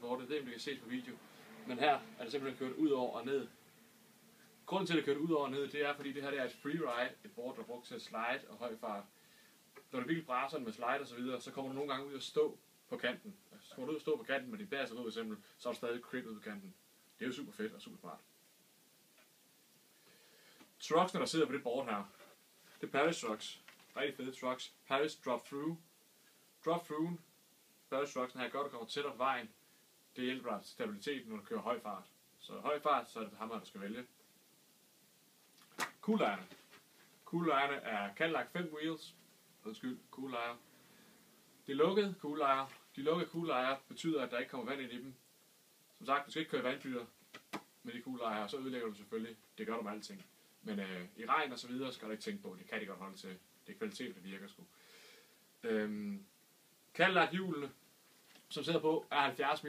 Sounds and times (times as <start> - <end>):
Speech: 0.0 - 3.6, 4.6 - 9.1, 9.9 - 18.3, 20.8 - 25.8, 26.6 - 27.3, 27.9 - 34.1, 35.9 - 36.6, 37.2 - 40.6, 41.6 - 45.2, 46.0 - 47.2, 47.8 - 54.7, 55.6 - 56.3, 56.9 - 57.8, 58.5 - 59.6.